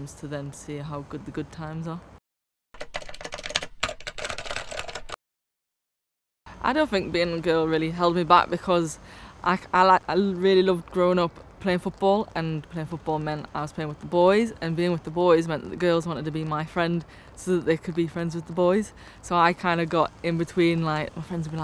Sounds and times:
Speech: 0.0 - 2.1, 6.6 - 21.6.

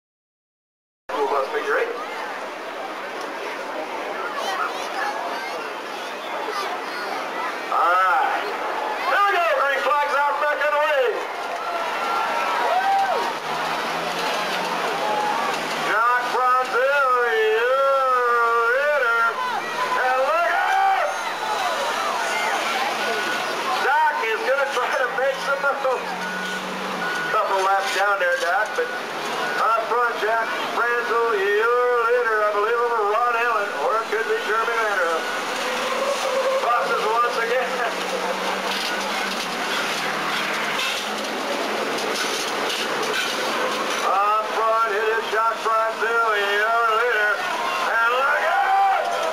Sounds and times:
Speech: 1.1 - 2.4, 3.5 - 11.3, 15.9 - 26.2, 27.3 - 29.0, 29.6 - 35.3, 36.6 - 38.3, 44.0 - 48.6
Vehicle: 1.1 - 49.3.

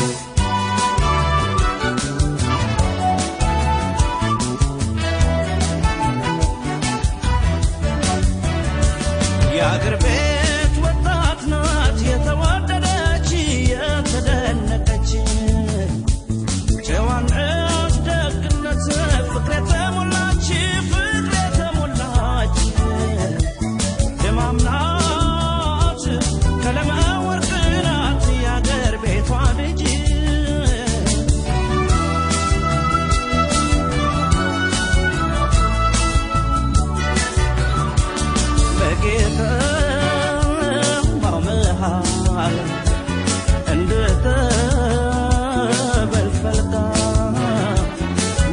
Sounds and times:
Jazz: 0.0 - 48.5
Middle Eastern music: 0.0 - 48.5.

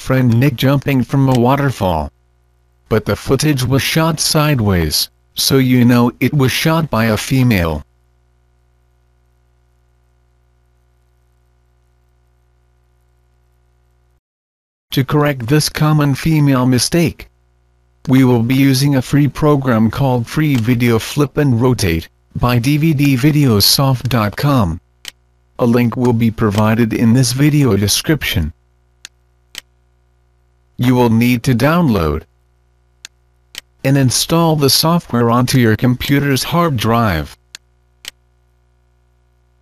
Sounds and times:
Speech synthesizer: 0.0 - 2.1, 2.9 - 7.8, 15.0 - 17.3, 18.1 - 24.8, 25.6 - 28.6, 30.8 - 32.3, 33.9 - 37.4.

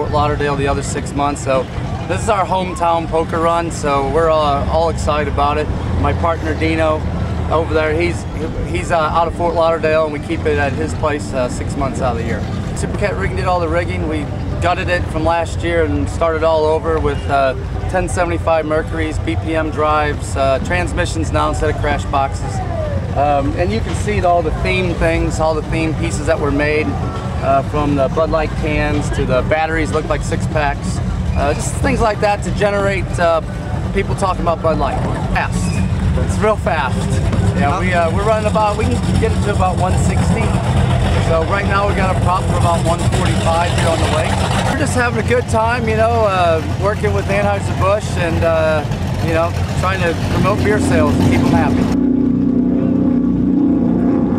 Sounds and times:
Speech: 0.0 - 40.6, 41.2 - 52.0.

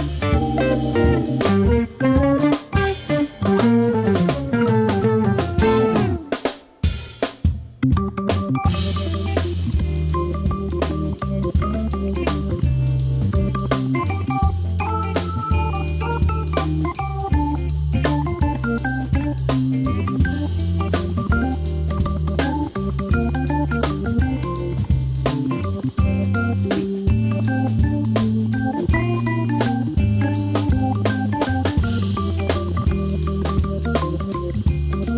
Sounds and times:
Jazz: 0.0 - 35.1.

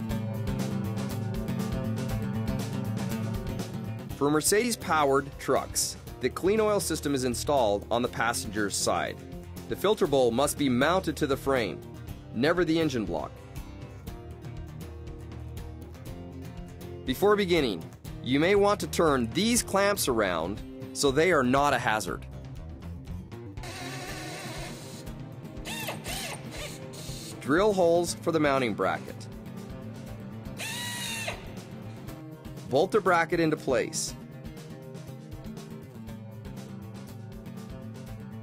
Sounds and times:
Music: 0.0 - 38.4
Speech: 4.2 - 11.8, 12.4 - 13.3, 17.1 - 22.2, 27.4 - 29.2, 32.7 - 34.2.

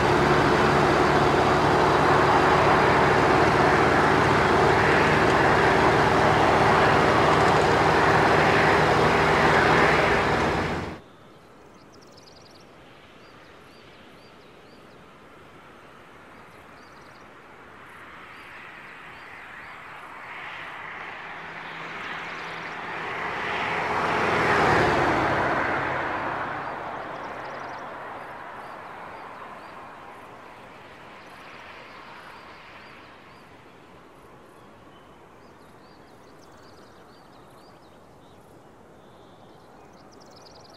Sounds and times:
Car: 0.0 - 11.0, 15.6 - 40.7.

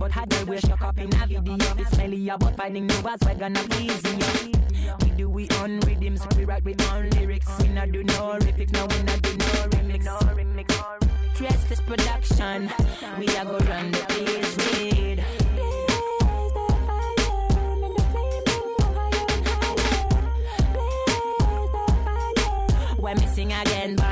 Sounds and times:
Hip hop music: 0.0 - 24.1.

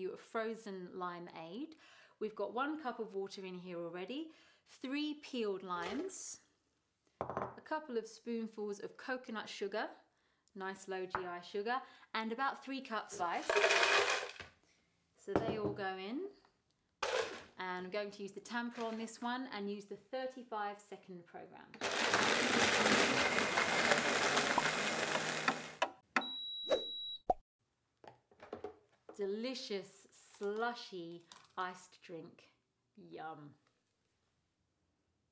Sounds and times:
Speech: 0.0 - 6.5, 7.6 - 10.0, 10.6 - 13.5, 15.2 - 16.4, 17.6 - 21.8, 29.2 - 33.6.

